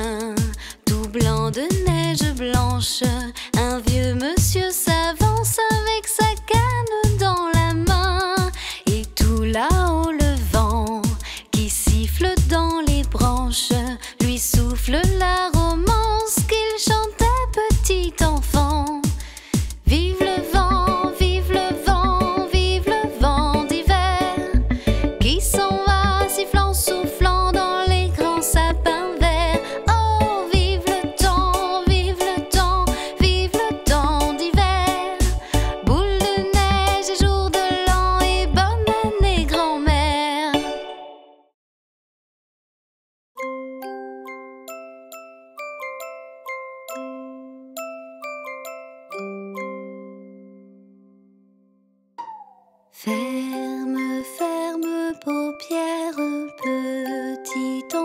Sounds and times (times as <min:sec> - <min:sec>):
Music for children: 0:00.0 - 0:41.6, 0:43.4 - 0:58.0.